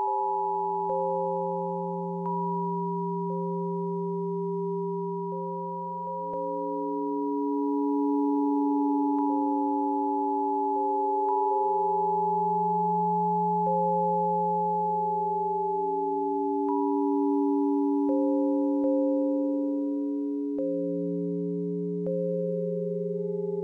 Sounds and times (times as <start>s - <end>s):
Sine wave: 0.0s - 23.6s.